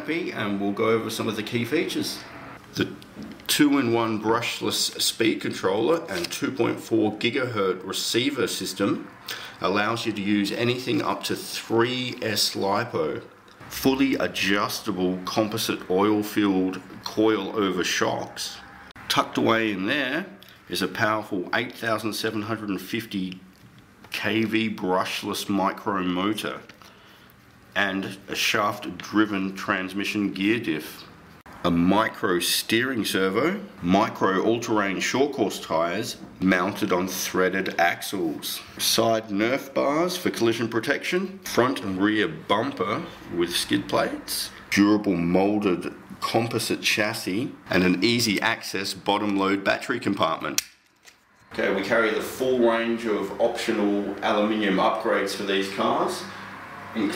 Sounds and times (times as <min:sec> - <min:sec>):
Speech: 0:00.0 - 0:23.5, 0:24.1 - 0:26.7, 0:27.8 - 0:50.6, 0:51.6 - 0:57.1.